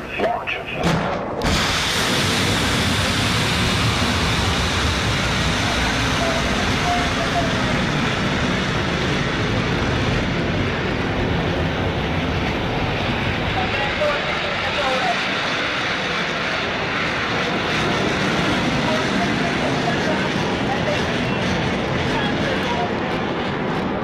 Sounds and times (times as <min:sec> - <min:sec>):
Speech: 0:00.0 - 0:01.0, 0:13.6 - 0:15.3, 0:18.8 - 0:23.1
Fixed-wing aircraft, airplane: 0:00.0 - 0:24.0
Outside, rural or natural: 0:00.3 - 0:24.0.